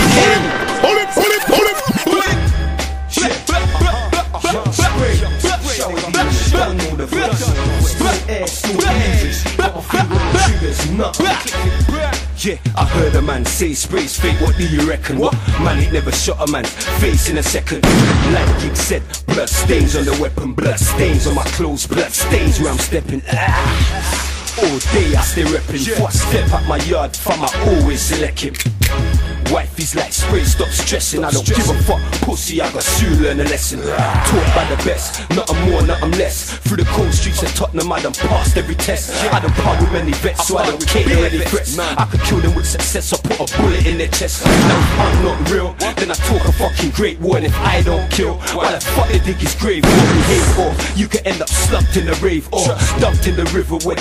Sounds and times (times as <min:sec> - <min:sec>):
Music: 0:00.0 - 0:54.0.